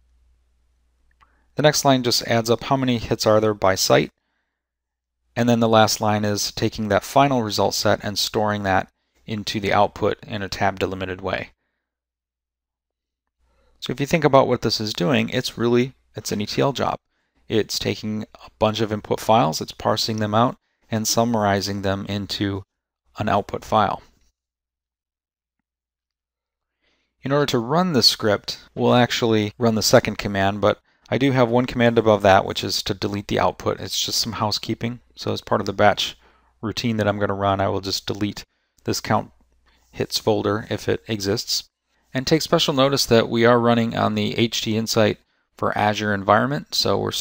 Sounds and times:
Speech: 1.6s - 4.2s, 5.4s - 11.6s, 13.8s - 24.2s, 27.2s - 47.2s.

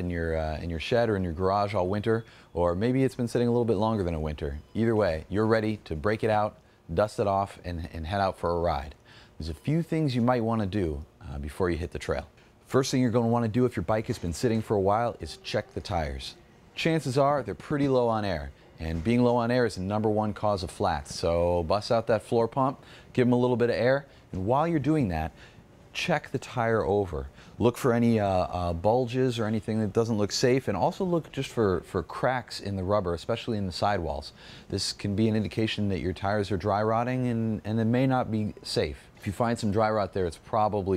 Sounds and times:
Speech: 0.0s - 40.9s.

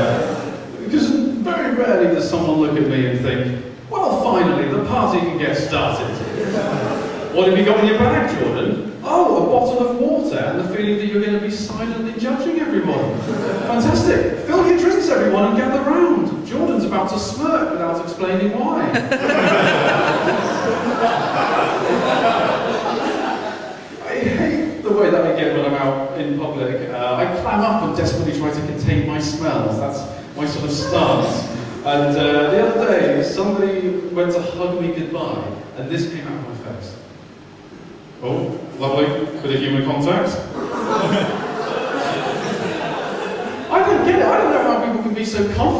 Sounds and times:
Male speech, man speaking: 0.0s - 6.7s, 7.3s - 19.0s, 24.0s - 37.0s, 38.2s - 40.5s, 43.7s - 45.8s.

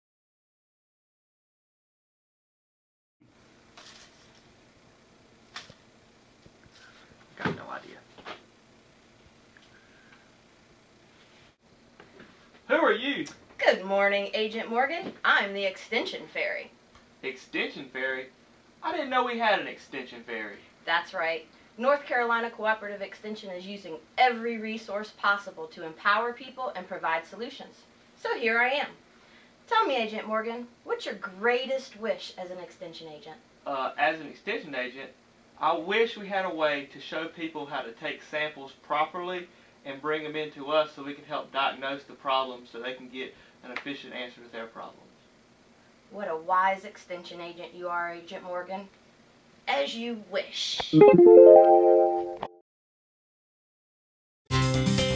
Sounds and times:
Speech: 7.4s - 8.1s, 12.7s - 29.0s, 29.7s - 45.1s, 46.1s - 48.9s, 49.7s - 51.2s.

